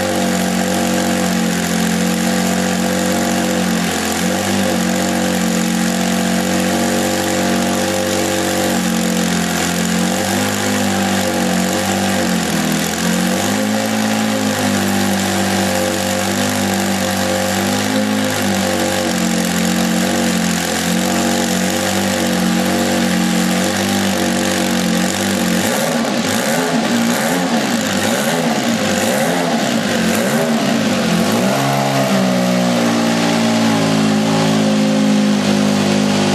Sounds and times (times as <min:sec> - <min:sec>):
Heavy engine (low frequency): 0:00.0 - 0:36.3
Vehicle: 0:00.0 - 0:36.3
Accelerating, revving, vroom: 0:12.8 - 0:15.5, 0:25.6 - 0:35.1.